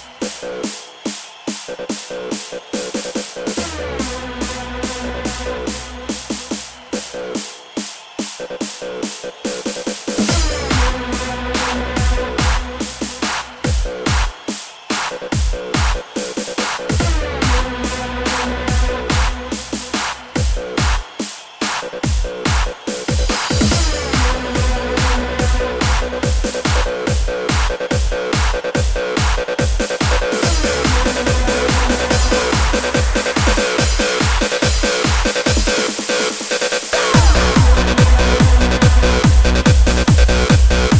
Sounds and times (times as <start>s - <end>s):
Music: 0.0s - 40.9s.